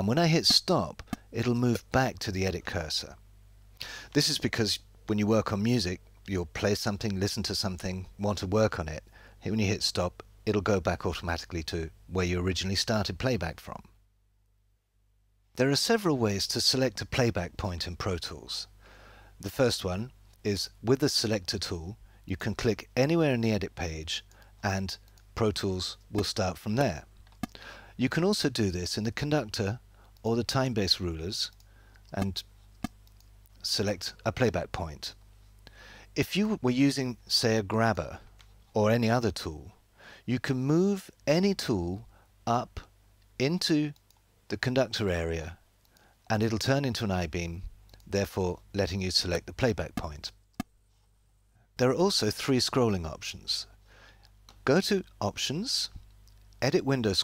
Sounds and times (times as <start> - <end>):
Speech: 0.0 - 3.2, 4.1 - 14.0, 15.6 - 18.7, 19.4 - 27.1, 28.0 - 32.5, 33.6 - 35.2, 36.2 - 45.6, 46.3 - 50.4, 51.8 - 53.7, 54.6 - 56.0, 56.6 - 57.2.